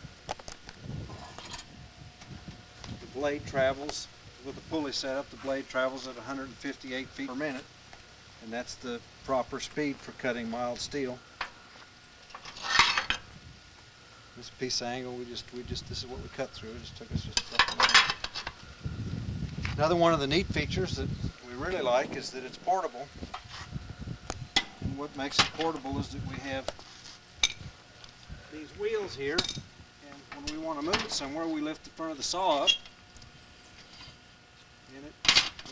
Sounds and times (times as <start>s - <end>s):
Speech: 3.0s - 7.7s, 8.4s - 11.2s, 14.4s - 18.0s, 19.8s - 23.1s, 24.9s - 26.7s, 28.5s - 32.8s, 34.9s - 35.7s.